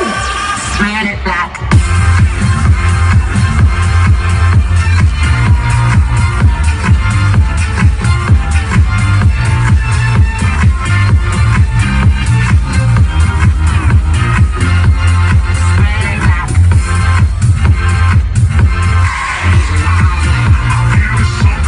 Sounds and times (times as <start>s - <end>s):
Independent music: 0.0s - 21.6s.